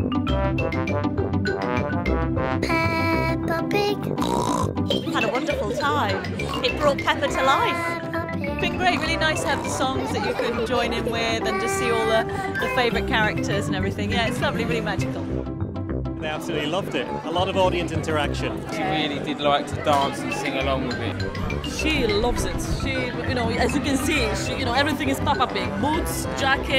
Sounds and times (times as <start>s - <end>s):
Music: 0.0s - 26.7s.